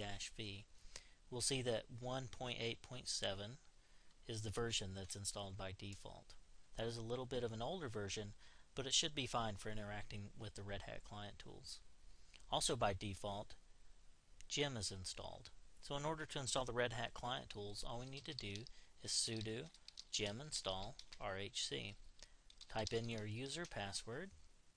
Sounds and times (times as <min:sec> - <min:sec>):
Speech: 0:00.0 - 0:00.7, 0:01.3 - 0:03.7, 0:04.3 - 0:11.9, 0:12.5 - 0:13.6, 0:14.4 - 0:22.0, 0:22.7 - 0:24.4.